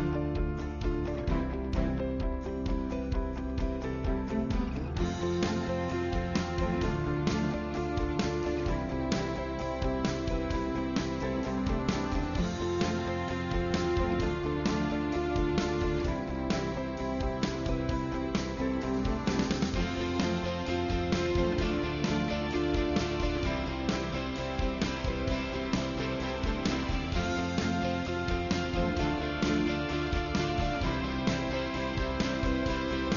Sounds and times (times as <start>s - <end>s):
Music: 0.0s - 33.1s.